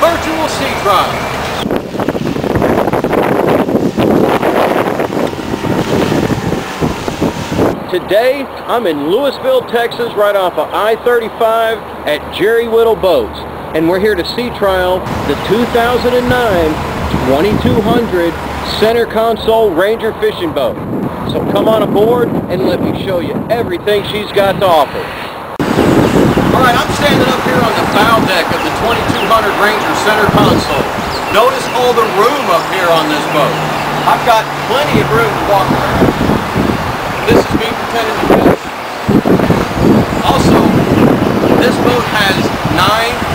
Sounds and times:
Speech: 0.0 - 1.2, 7.9 - 25.1, 26.6 - 36.0, 37.3 - 38.6, 40.2 - 40.8, 41.6 - 43.2.

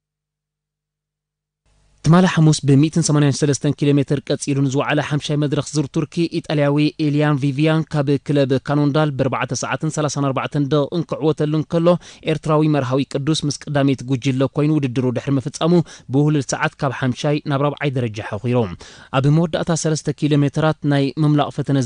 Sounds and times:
Speech: 2.0 - 21.8.

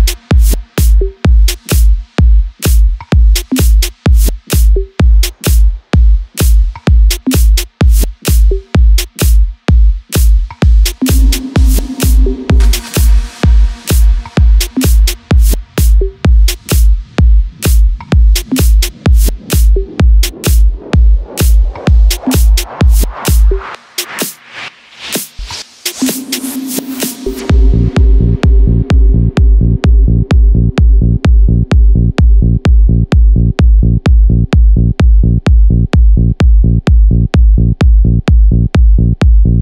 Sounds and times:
Music: 0.0 - 39.6.

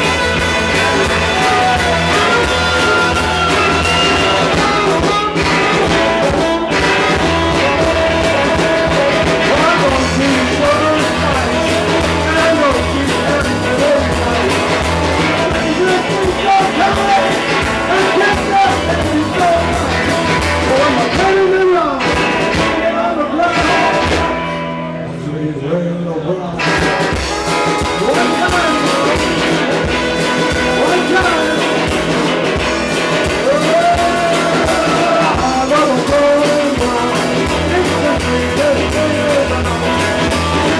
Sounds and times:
Rock and roll: 0.0 - 40.7.

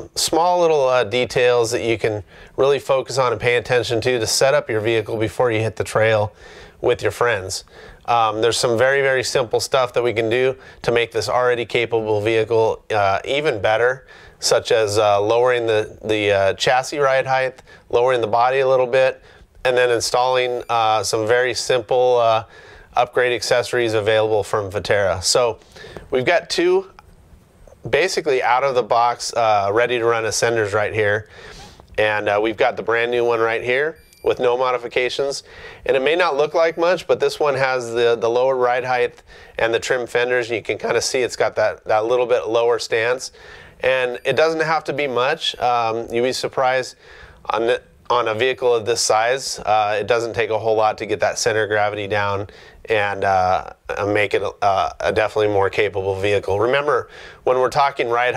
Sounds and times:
Speech: 0.0 - 27.0, 27.7 - 31.3, 32.0 - 58.3.

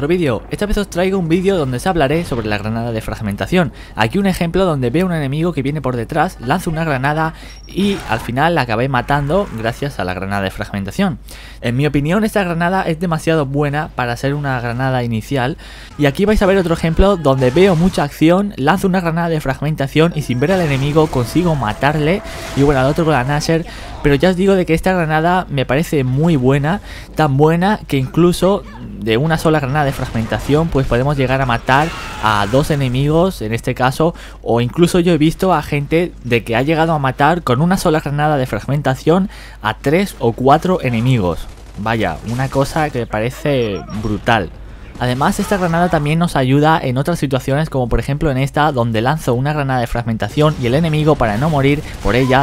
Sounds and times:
Speech: 0.0 - 52.4.

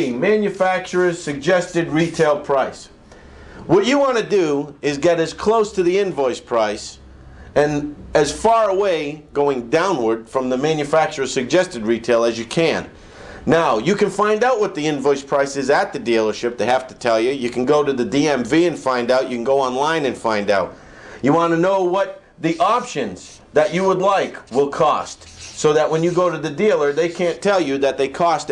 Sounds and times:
Speech: 0.0 - 3.0, 3.7 - 7.0, 7.6 - 28.5.

